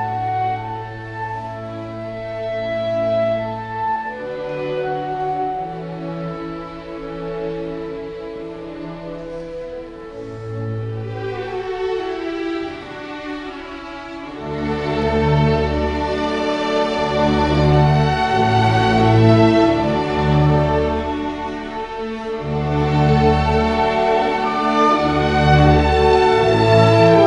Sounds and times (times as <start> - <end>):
Clarinet: 0.0 - 13.6, 14.2 - 27.2.